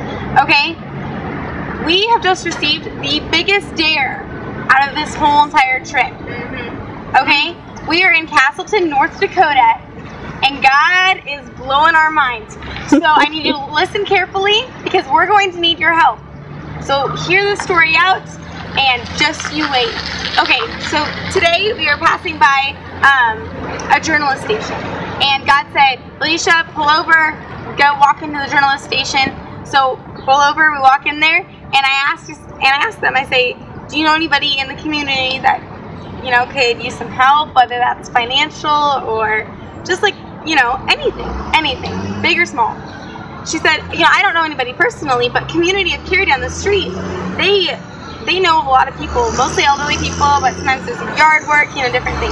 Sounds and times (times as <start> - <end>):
Speech: 0.4 - 0.8, 10.4 - 16.2, 16.9 - 35.6, 36.2 - 42.8, 43.5 - 52.3.